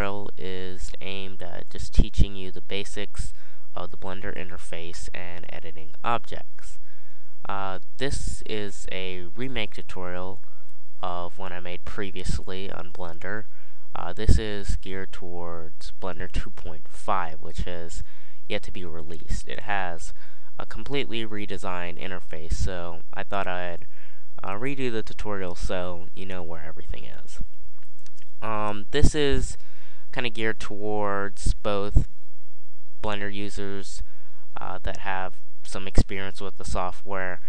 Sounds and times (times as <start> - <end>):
Speech: 0.0 - 27.4, 28.4 - 32.1, 33.0 - 37.4.